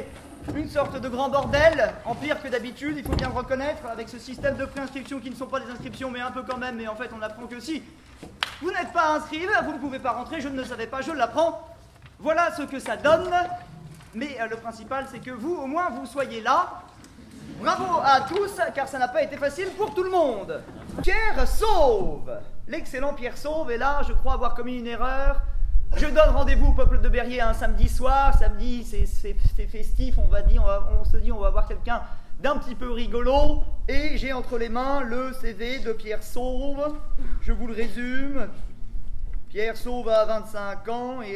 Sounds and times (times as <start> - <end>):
Speech: 0.0 - 7.9, 8.6 - 16.9, 17.6 - 38.6, 39.5 - 41.3.